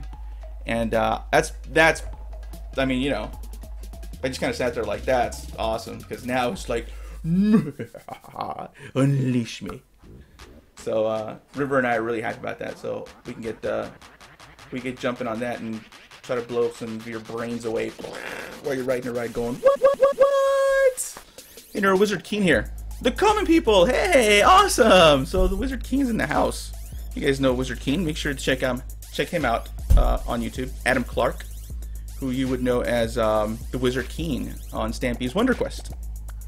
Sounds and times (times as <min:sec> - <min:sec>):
Music: 0:00.0 - 0:08.0, 0:10.2 - 0:36.4
Speech: 0:00.7 - 0:02.1, 0:02.8 - 0:03.3, 0:04.2 - 0:07.5, 0:08.4 - 0:09.8, 0:10.8 - 0:13.9, 0:14.7 - 0:19.6, 0:21.8 - 0:31.4, 0:32.2 - 0:35.9.